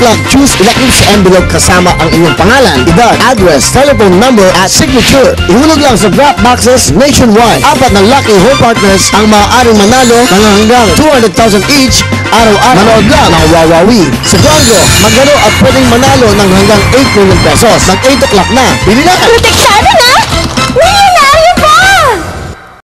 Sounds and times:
Speech: 0:00.0 - 0:20.2
Music: 0:00.0 - 0:22.8.

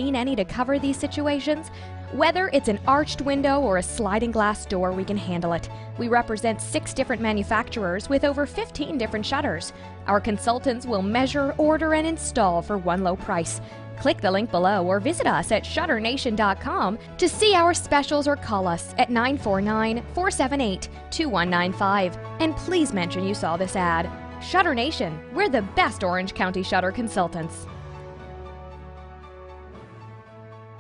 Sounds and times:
Speech: 0:00.0 - 0:27.7
Music: 0:00.0 - 0:30.8.

